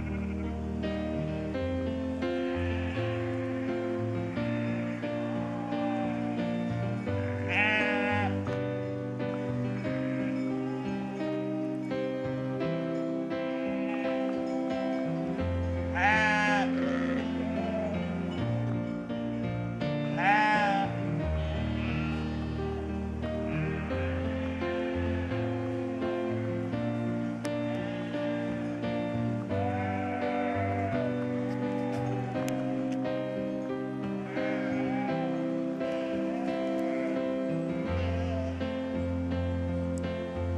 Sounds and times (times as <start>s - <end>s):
Bleat: 0.0s - 0.6s, 2.5s - 8.6s, 9.3s - 11.5s, 13.5s - 14.9s, 15.6s - 18.4s, 20.1s - 26.7s, 27.7s - 28.8s, 29.4s - 33.0s, 34.0s - 38.6s
Music: 0.0s - 40.5s.